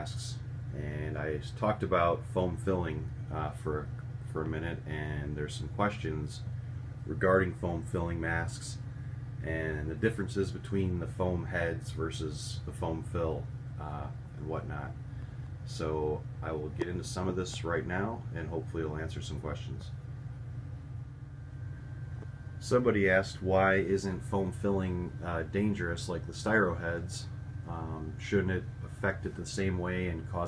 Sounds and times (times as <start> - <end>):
Speech: 0.0 - 6.5, 7.1 - 8.8, 9.4 - 15.0, 15.7 - 20.0, 22.6 - 30.4.